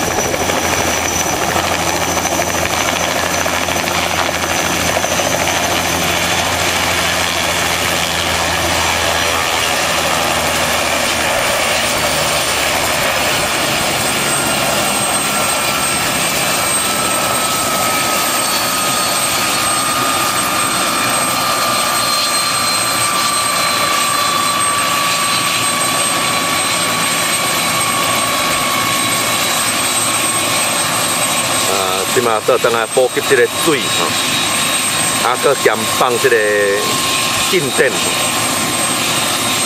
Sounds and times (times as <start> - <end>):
Aircraft engine: 0.0 - 39.6
Helicopter: 0.0 - 39.6
Speech: 31.6 - 34.2, 35.2 - 38.2.